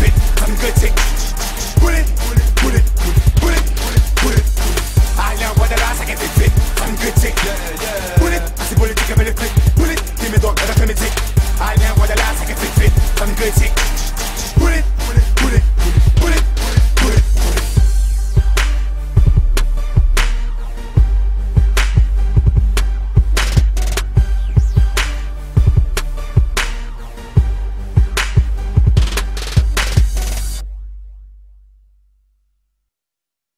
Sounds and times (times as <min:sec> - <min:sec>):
Hip hop music: 0:00.0 - 0:31.0.